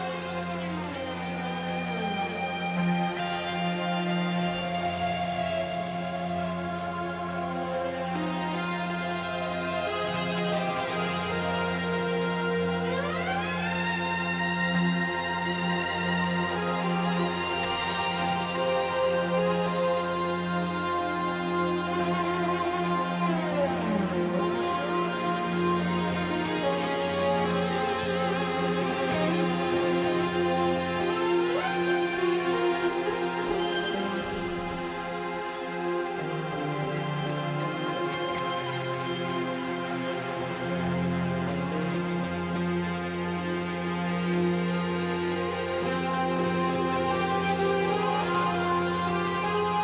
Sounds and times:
Music: 0.0s - 49.8s.

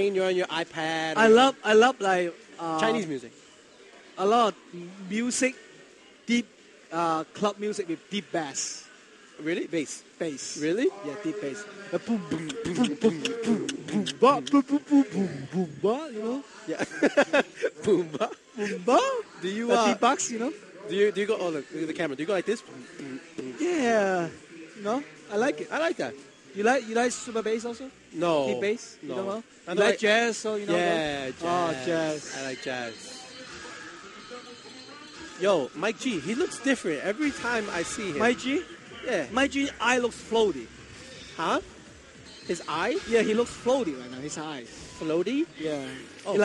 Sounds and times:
Speech: 9.5s - 27.8s.

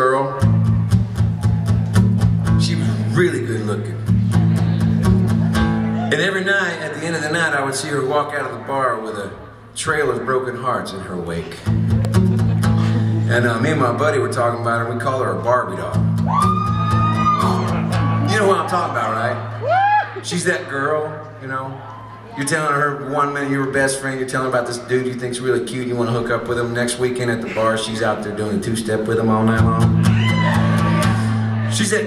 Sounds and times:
Speech: 0.0s - 0.4s, 2.6s - 4.0s, 6.1s - 11.6s, 13.3s - 16.0s, 18.3s - 19.4s, 20.2s - 29.9s, 31.7s - 32.0s
Music: 0.3s - 6.2s, 11.5s - 14.3s, 15.9s - 18.8s, 29.5s - 31.8s.

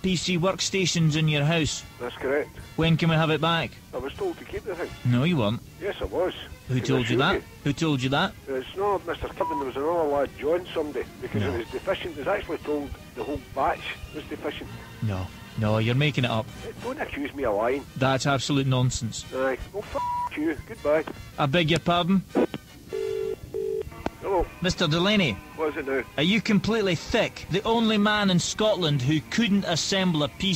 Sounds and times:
Speech: 0.0s - 22.2s, 24.2s - 30.5s
Music: 0.0s - 30.5s.

